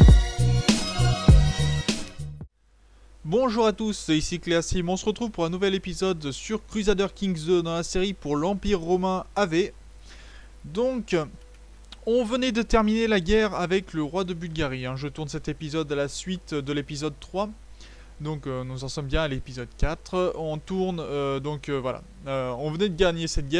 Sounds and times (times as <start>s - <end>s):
Speech: 3.2s - 9.8s, 10.6s - 11.4s, 12.0s - 17.6s, 18.2s - 23.5s.